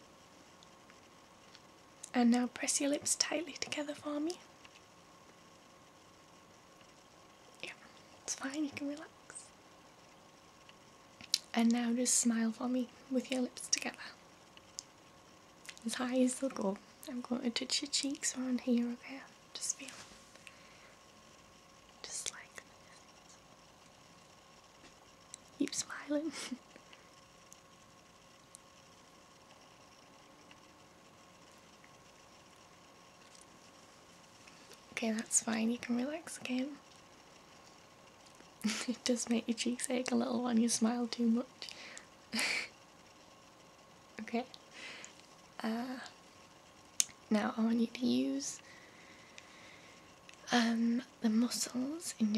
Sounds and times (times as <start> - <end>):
Speech: 2.1 - 4.4, 8.3 - 9.4, 11.5 - 14.2, 15.8 - 19.9, 25.6 - 26.6, 35.0 - 36.8, 38.7 - 41.5, 44.2 - 44.5, 45.6 - 46.1, 47.3 - 48.6, 50.5 - 52.3
Whispering: 2.1 - 4.4, 7.6 - 9.5, 11.5 - 14.2, 15.7 - 20.1, 22.0 - 23.3, 25.6 - 26.6, 35.0 - 36.8, 45.6 - 46.2, 50.5 - 52.3.